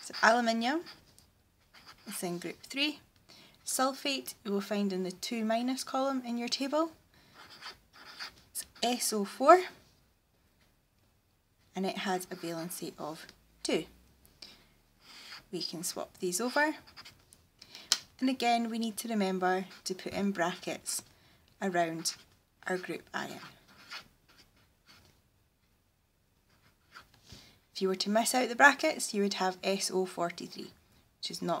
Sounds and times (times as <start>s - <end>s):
Speech: 0.0s - 0.9s, 2.1s - 3.0s, 3.7s - 7.0s, 8.6s - 9.8s, 11.8s - 13.9s, 15.6s - 16.8s, 18.2s - 21.0s, 21.6s - 23.6s, 27.8s - 31.6s
Writing: 0.0s - 2.8s, 6.6s - 9.7s, 15.0s - 17.2s, 18.3s - 25.2s, 26.5s - 27.2s.